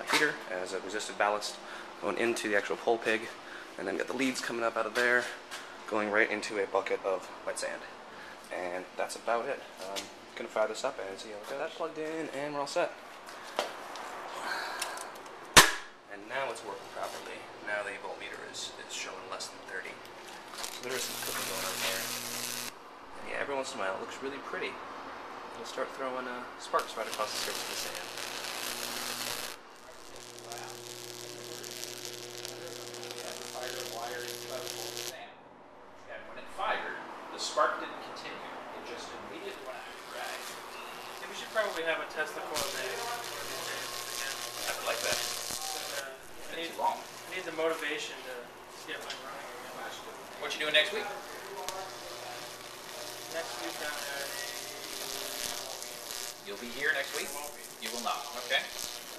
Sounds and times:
Speech: 0.0 - 7.9, 8.5 - 13.0, 16.1 - 20.0, 20.7 - 22.1, 23.2 - 24.8, 25.6 - 28.1, 29.9 - 31.8, 32.5 - 35.4, 36.1 - 40.5, 41.2 - 58.7.

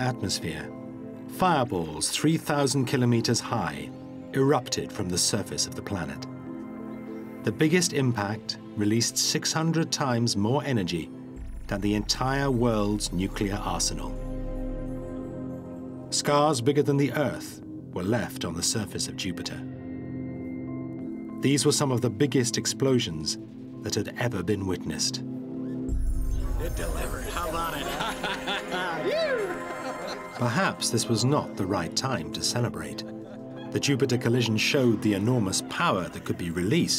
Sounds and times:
Speech: 0.0 - 0.7, 1.4 - 6.3, 7.5 - 11.1, 11.7 - 14.2, 16.2 - 19.7, 21.4 - 25.2, 26.6 - 29.2, 30.4 - 33.1, 33.8 - 36.9
Music: 0.0 - 36.9.

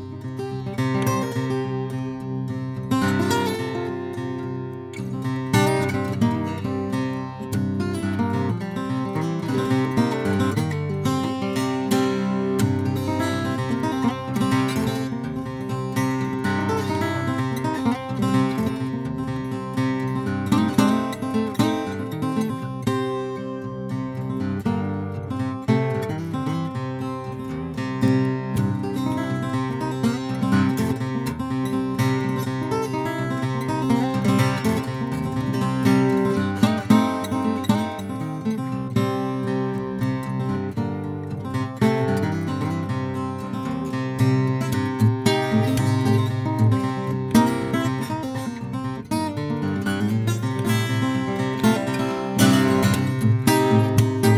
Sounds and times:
Acoustic guitar: 0.0 - 54.3.

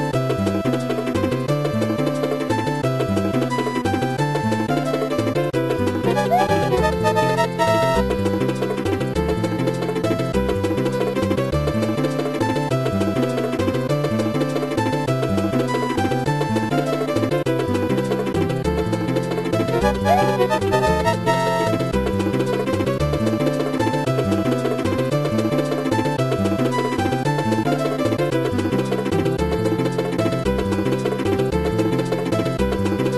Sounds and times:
Music: 0.0 - 33.1.

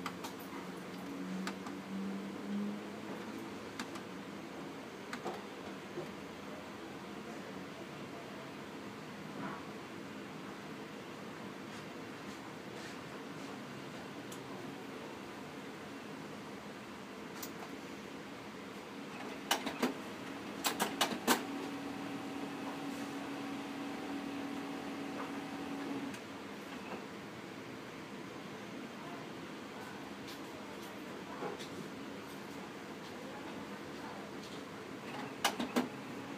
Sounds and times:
Speech: 6.0 - 9.6, 28.6 - 35.4
Printer: 18.9 - 27.1, 34.5 - 36.3.

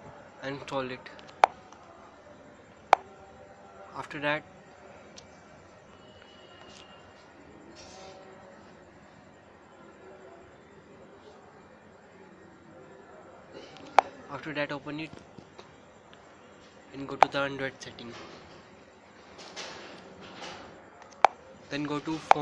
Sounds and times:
Speech: 0.0 - 15.2, 16.9 - 18.4, 21.4 - 22.4.

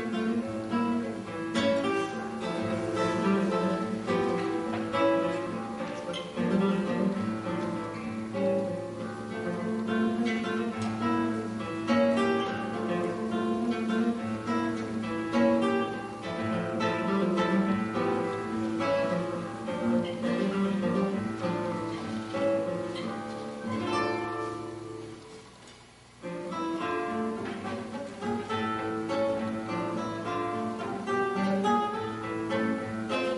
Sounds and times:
Strum: 0.0 - 33.3.

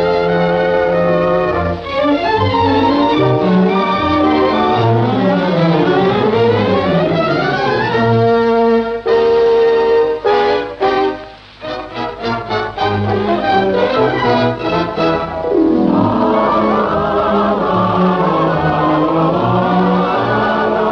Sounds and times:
Background music: 0.0 - 20.9.

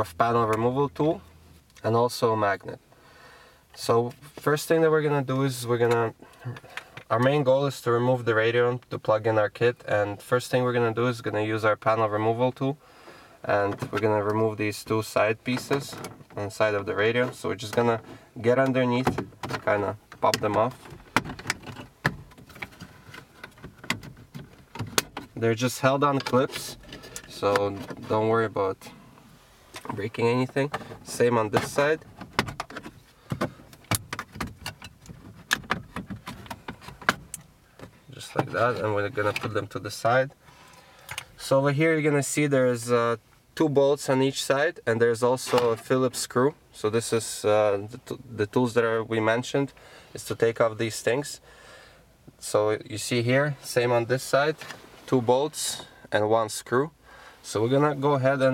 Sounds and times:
Speech: 0.0 - 2.8, 3.8 - 12.8, 13.5 - 20.8, 25.4 - 28.9, 29.9 - 32.0, 38.1 - 40.4, 41.4 - 51.4, 52.4 - 58.5.

